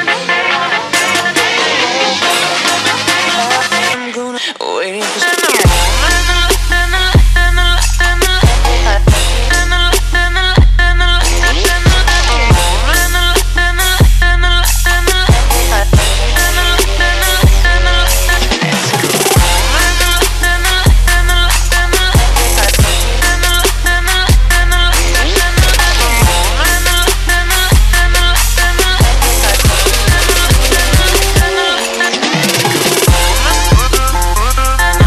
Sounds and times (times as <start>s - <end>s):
Music: 0.0s - 35.0s.